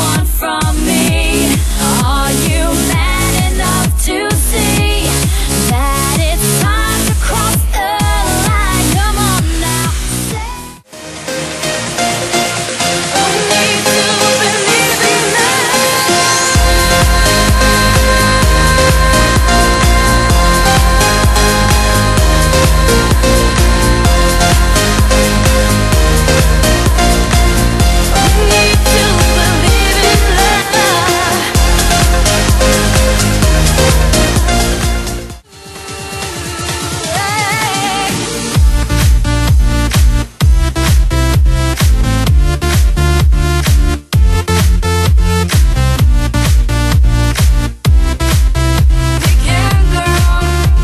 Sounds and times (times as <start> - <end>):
Rhythm and blues: 0.0 - 50.8.